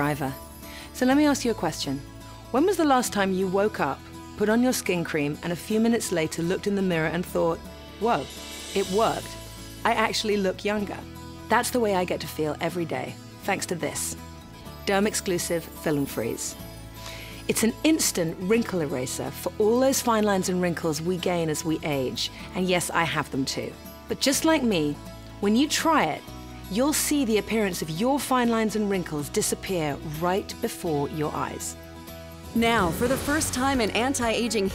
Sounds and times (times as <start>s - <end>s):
Speech: 0.0s - 0.4s, 1.0s - 2.0s, 2.6s - 14.2s, 14.8s - 16.5s, 17.5s - 31.7s, 32.6s - 34.7s
Music: 0.0s - 34.7s.